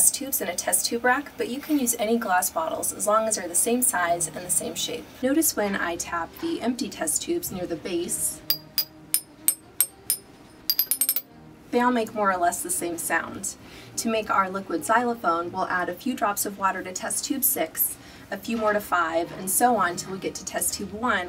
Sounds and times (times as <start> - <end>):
Speech: 0.0 - 8.4, 11.7 - 21.2
Music: 0.0 - 21.2.